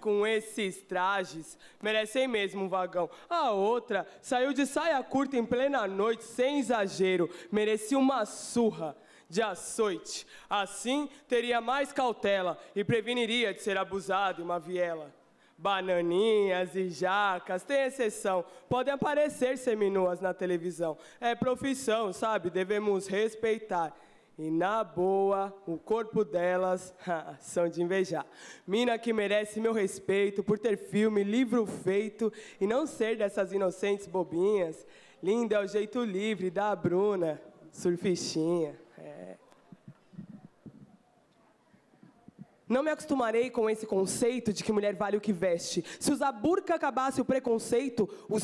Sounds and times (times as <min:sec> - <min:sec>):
Speech: 0:00.0 - 0:39.5, 0:42.3 - 0:48.4.